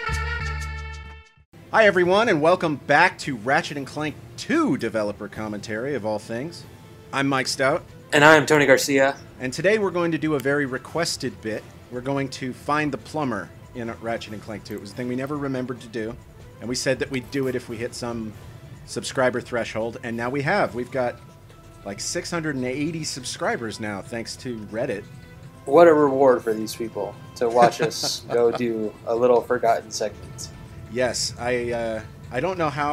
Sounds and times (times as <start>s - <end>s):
Music: 0.0s - 32.9s
Speech: 1.7s - 21.2s, 21.9s - 25.0s, 25.7s - 32.9s.